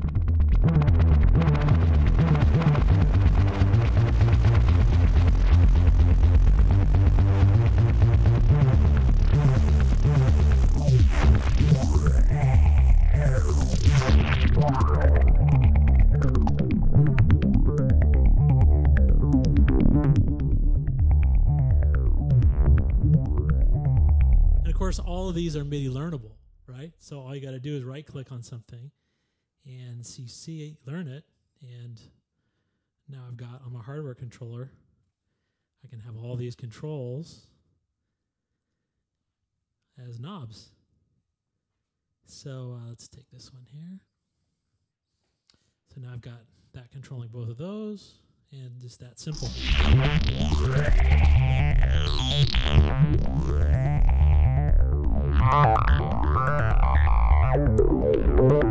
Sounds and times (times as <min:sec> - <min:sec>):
Synthesizer: 0:00.0 - 0:26.2, 0:49.4 - 0:58.7
Speech: 0:13.2 - 0:13.5, 0:24.6 - 0:29.0, 0:29.6 - 0:32.2, 0:33.1 - 0:34.8, 0:35.8 - 0:37.6, 0:39.9 - 0:40.8, 0:42.3 - 0:44.1, 0:45.9 - 0:49.6.